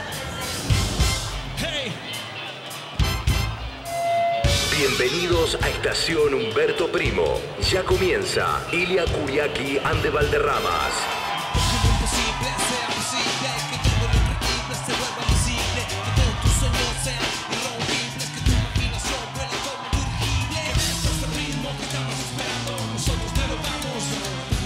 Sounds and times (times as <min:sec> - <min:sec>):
Pop music: 0:00.0 - 0:24.6.